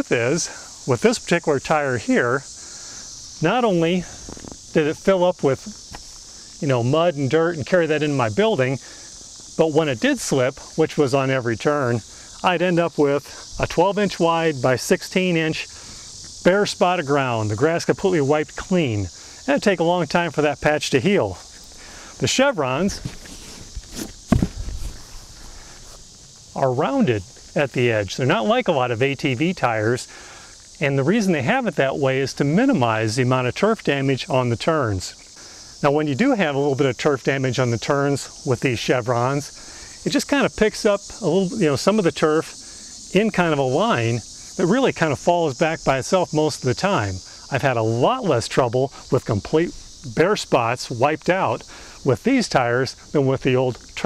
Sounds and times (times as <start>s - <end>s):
Speech: 0.0s - 2.5s, 3.4s - 4.1s, 4.8s - 5.8s, 6.6s - 8.8s, 9.6s - 15.7s, 16.4s - 21.4s, 22.2s - 23.1s, 26.6s - 30.1s, 30.8s - 35.2s, 35.8s - 54.0s.